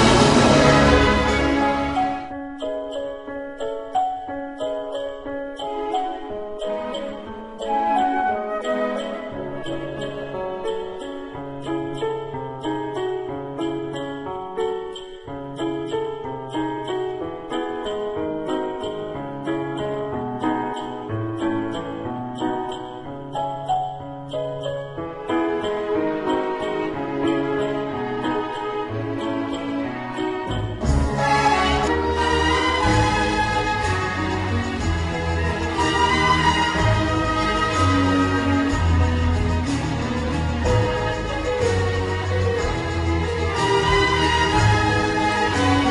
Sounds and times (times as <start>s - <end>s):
Theme music: 0.0s - 3.0s, 5.6s - 12.1s, 25.2s - 45.9s.